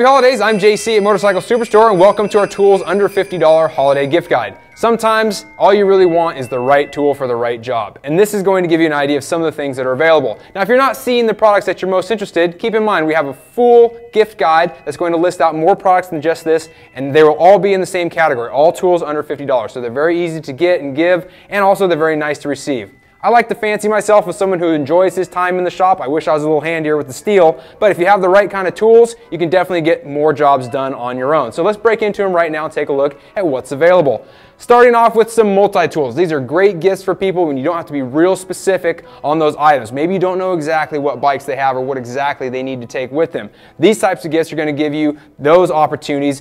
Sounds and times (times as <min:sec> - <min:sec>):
Music: 0:00.0 - 0:46.4
Speech: 0:00.0 - 0:46.4.